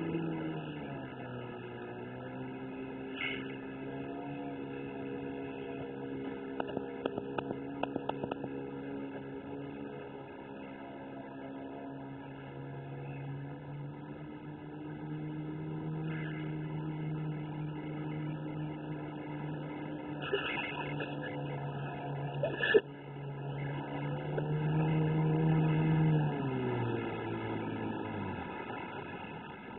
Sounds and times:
Motorboat, speedboat: 0.0 - 29.7.

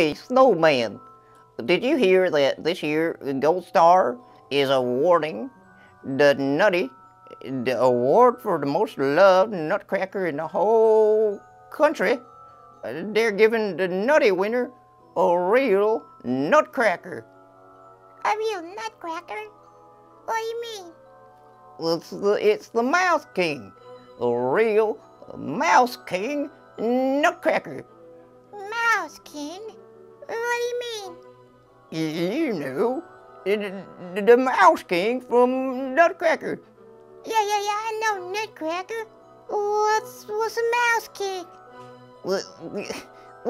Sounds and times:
Music: 0.0 - 43.5.

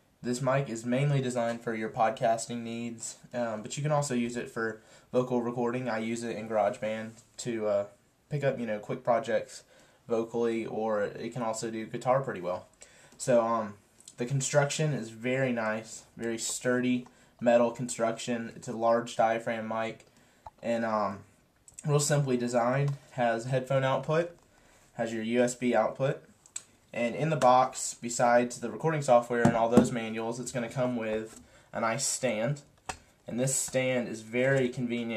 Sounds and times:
Speech: 0.2 - 24.4, 25.0 - 26.3, 26.9 - 32.7, 33.3 - 35.1.

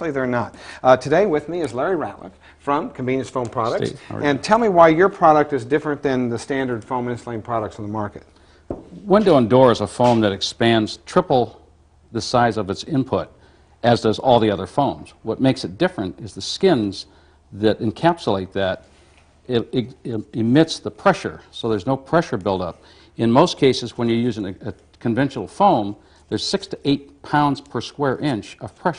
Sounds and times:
Speech: 0.0 - 8.3, 9.0 - 18.8, 19.5 - 28.9.

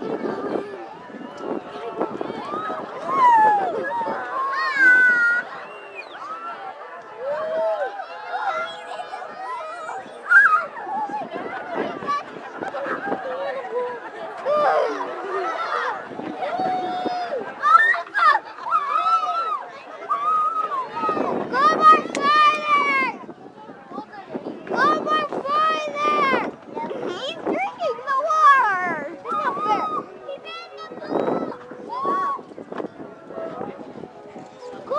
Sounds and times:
Water: 0.0 - 30.6.

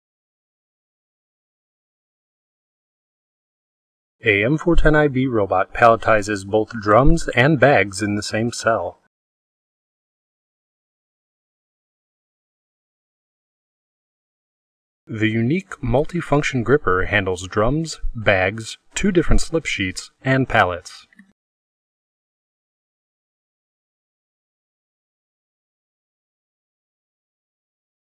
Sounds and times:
Speech: 4.2 - 9.1, 15.1 - 21.4.

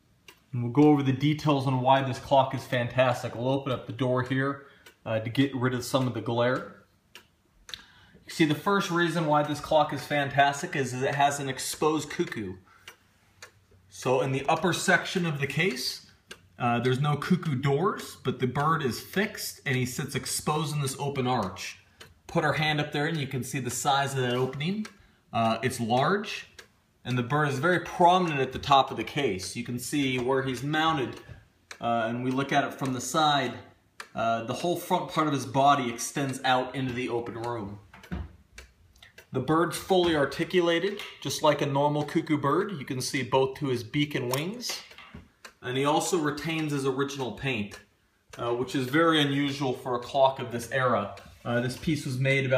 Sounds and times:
Tick-tock: 0.0 - 52.5
Tick: 0.2 - 1.0, 4.2 - 5.0, 5.9 - 7.9, 11.0 - 13.6, 16.3 - 16.5, 20.8 - 23.3, 26.0 - 26.7, 30.0 - 35.5, 36.2 - 42.2, 44.3 - 52.5
Speech: 0.5 - 6.9, 8.3 - 12.7, 13.9 - 37.9, 39.2 - 45.0, 45.6 - 52.5.

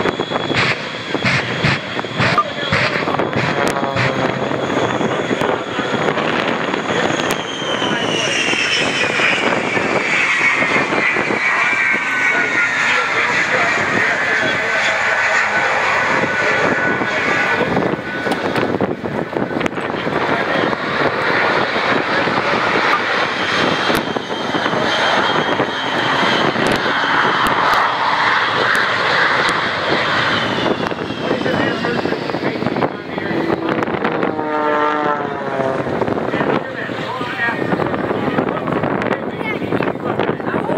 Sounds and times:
Aircraft engine: 0.0 - 40.7
Outside, rural or natural: 0.0 - 40.7
Speech: 2.1 - 4.4, 5.0 - 9.6, 11.5 - 17.8, 19.7 - 20.9, 31.2 - 33.7, 36.2 - 40.7.

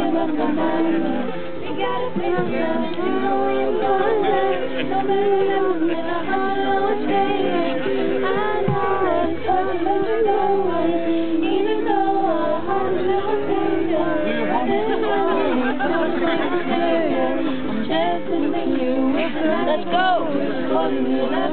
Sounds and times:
Music: 0.0 - 21.5
Singing: 0.0 - 21.5.

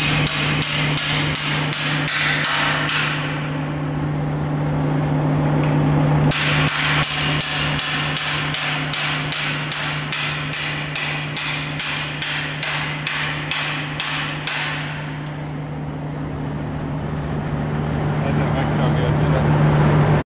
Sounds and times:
Speech: 18.2 - 19.5.

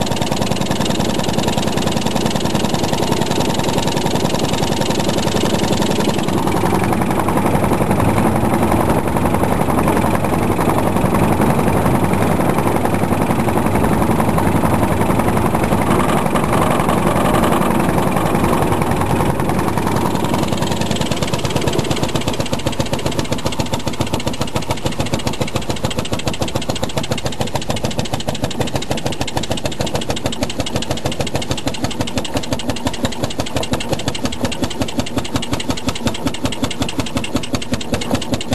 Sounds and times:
Boat, Water vehicle: 0.0 - 38.5.

